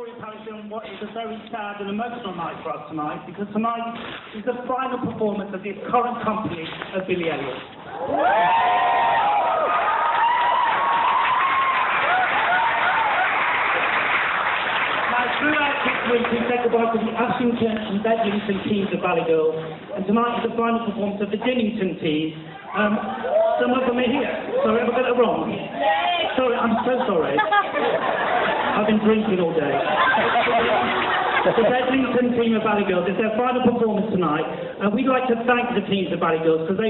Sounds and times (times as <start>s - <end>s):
Male speech, man speaking: 0.0s - 7.6s, 15.1s - 27.6s, 28.7s - 36.9s.